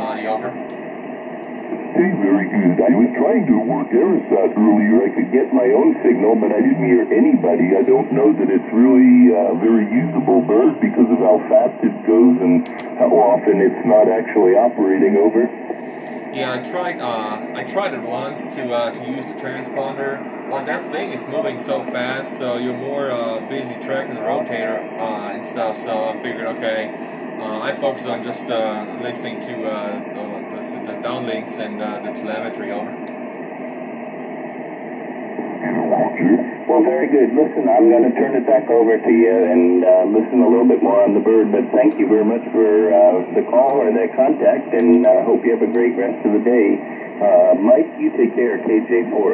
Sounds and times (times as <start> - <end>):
Speech: 0.0 - 0.6, 2.0 - 15.5, 16.3 - 33.1, 35.6 - 49.3
Radio: 0.0 - 49.3.